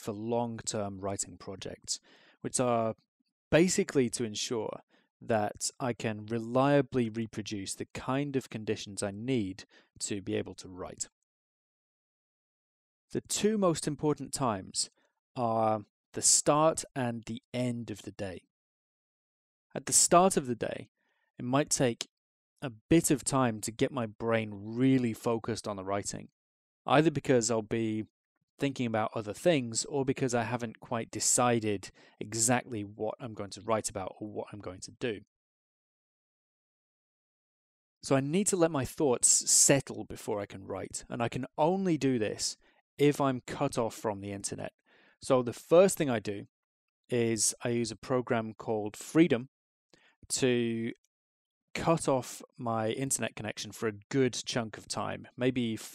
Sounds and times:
Speech: 0:00.0 - 0:03.0, 0:03.6 - 0:11.1, 0:13.1 - 0:18.4, 0:19.8 - 0:26.3, 0:26.9 - 0:35.2, 0:38.0 - 0:46.5, 0:47.1 - 0:49.5, 0:50.3 - 0:51.0, 0:51.8 - 0:55.9.

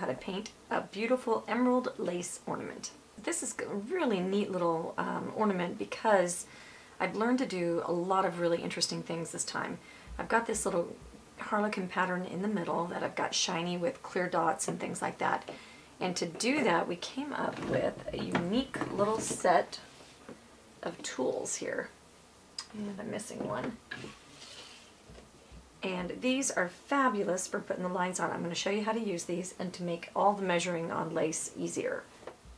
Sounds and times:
Speech: 0:00.0 - 0:19.9, 0:20.8 - 0:22.0, 0:22.6 - 0:23.8, 0:25.8 - 0:32.1.

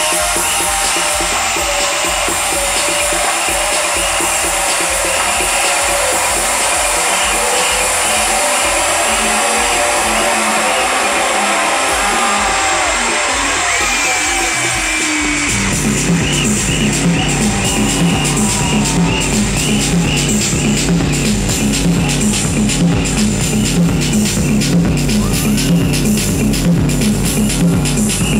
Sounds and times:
Music: 0:00.0 - 0:28.3.

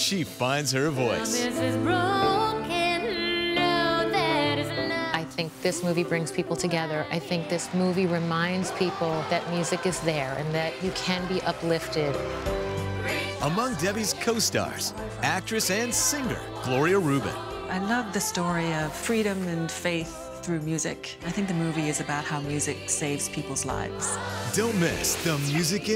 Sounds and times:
Music: 0:00.0 - 0:25.9.

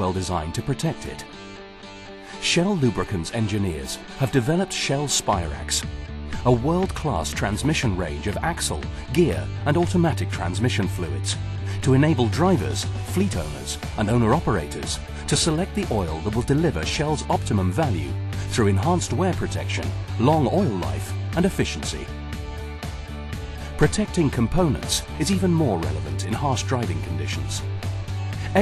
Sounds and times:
Speech: 0:00.0 - 0:01.3, 0:02.4 - 0:22.1, 0:23.8 - 0:27.7
Music: 0:00.0 - 0:28.6.

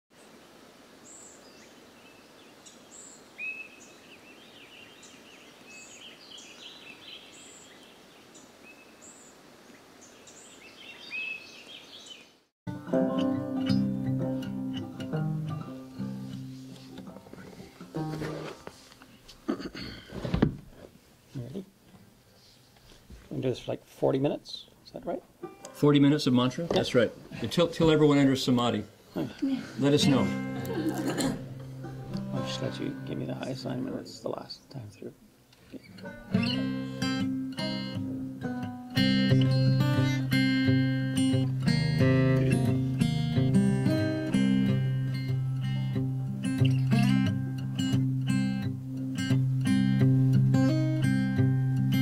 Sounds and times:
Environmental noise: 0:00.1 - 0:52.0.

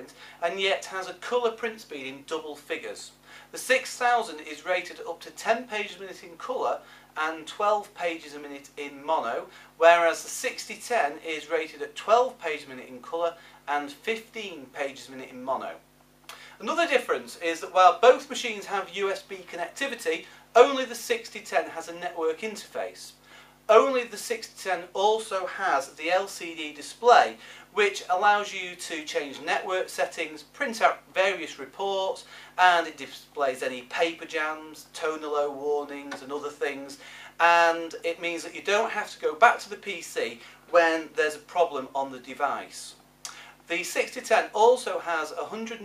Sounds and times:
Speech: 0:00.0 - 0:15.8, 0:16.6 - 0:43.0, 0:43.7 - 0:45.8.

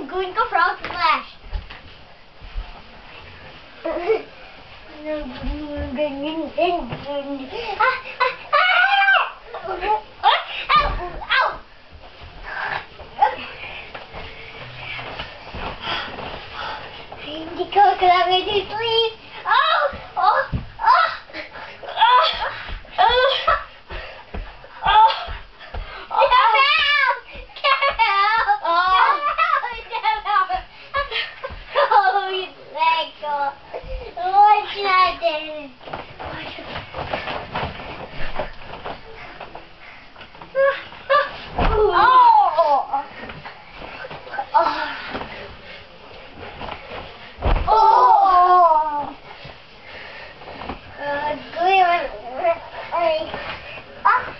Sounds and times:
Speech: 0:26.1 - 0:30.7.

